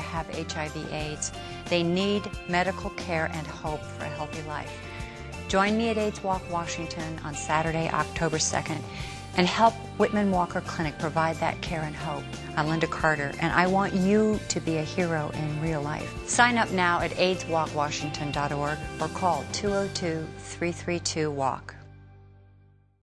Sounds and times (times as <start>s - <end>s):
Speech: 0.0s - 4.7s, 5.5s - 21.8s
Music: 0.0s - 23.0s.